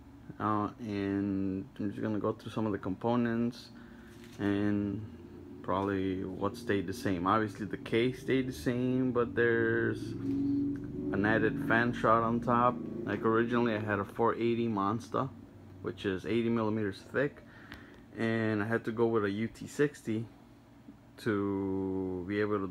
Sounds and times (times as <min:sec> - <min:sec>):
Speech: 0:00.3 - 0:03.8, 0:04.4 - 0:10.2, 0:11.1 - 0:17.4, 0:18.2 - 0:20.3, 0:21.2 - 0:22.7.